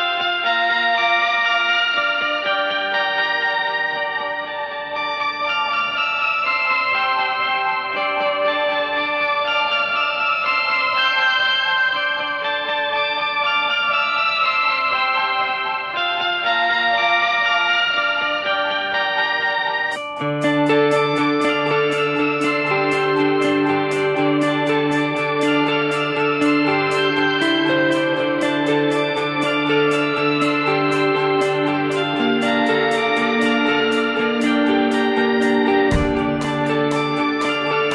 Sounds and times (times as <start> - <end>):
Acoustic guitar: 20.0 - 37.9
Strum: 20.0 - 37.9.